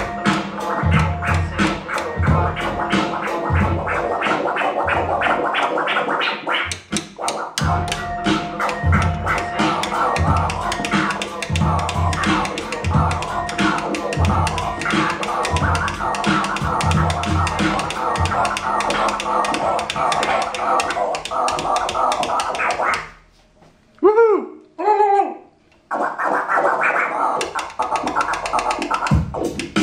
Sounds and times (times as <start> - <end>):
Scratching (performance technique): 0.0 - 23.5, 25.9 - 29.8.